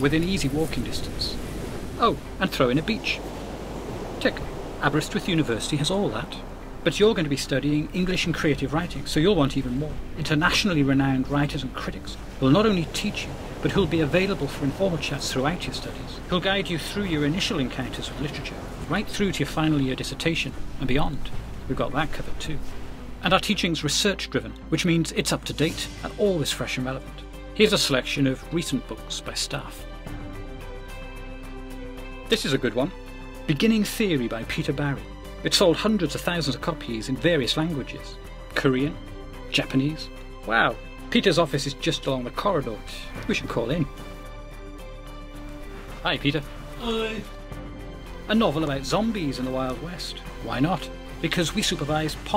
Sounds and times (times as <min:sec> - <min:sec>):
Speech: 0:00.0 - 0:01.4, 0:02.0 - 0:03.3, 0:04.2 - 0:22.6, 0:23.2 - 0:29.8, 0:32.3 - 0:32.9, 0:33.5 - 0:44.0, 0:46.0 - 0:47.3, 0:48.3 - 0:52.3
Music: 0:00.0 - 0:52.3.